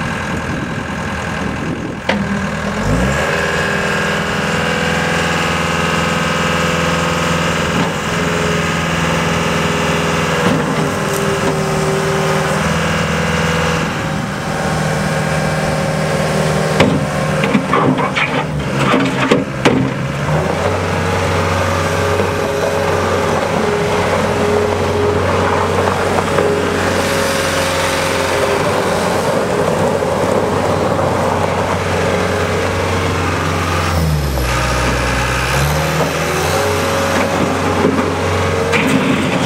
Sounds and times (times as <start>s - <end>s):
Vehicle: 0.0s - 39.4s.